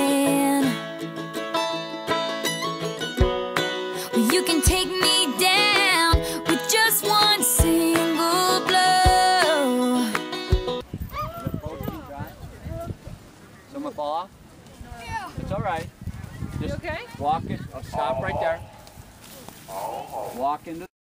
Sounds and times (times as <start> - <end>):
Animal: 19.6 - 20.6.